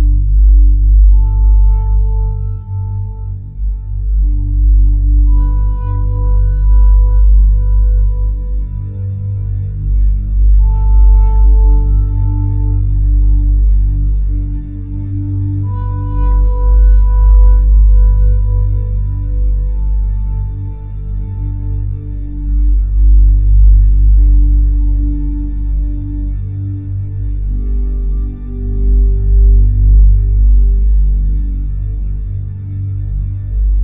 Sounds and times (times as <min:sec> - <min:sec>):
Music: 0:00.0 - 0:33.8.